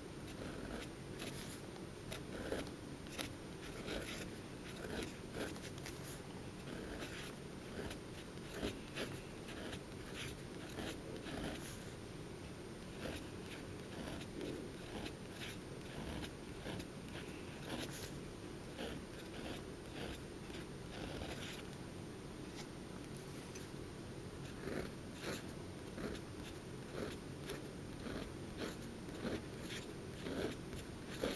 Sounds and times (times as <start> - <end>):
Writing: 0.3 - 12.0, 12.8 - 21.7, 24.4 - 31.3.